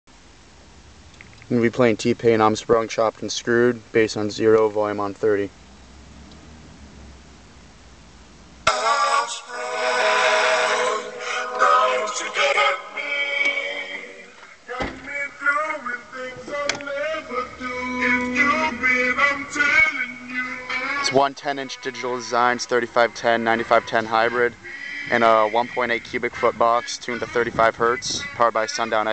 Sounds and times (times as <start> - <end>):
Speech: 1.5 - 5.5, 21.1 - 24.5, 25.1 - 29.1
Music: 8.7 - 21.1.